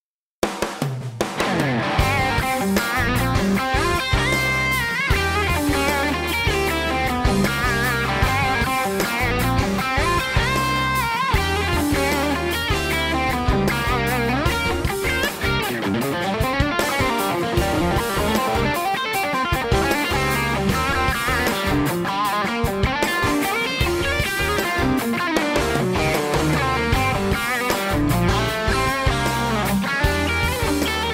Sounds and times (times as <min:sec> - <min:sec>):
Effects unit: 0:01.2 - 0:31.1
Electric guitar: 0:01.2 - 0:31.1.